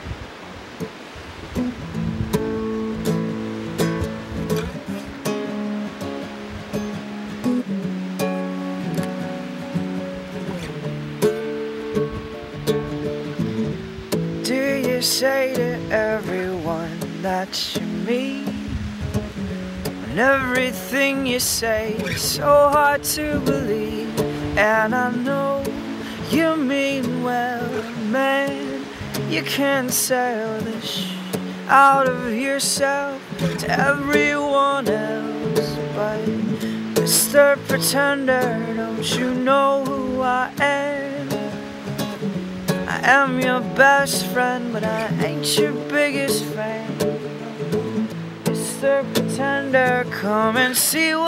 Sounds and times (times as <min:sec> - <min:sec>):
Music: 0:01.6 - 0:51.2.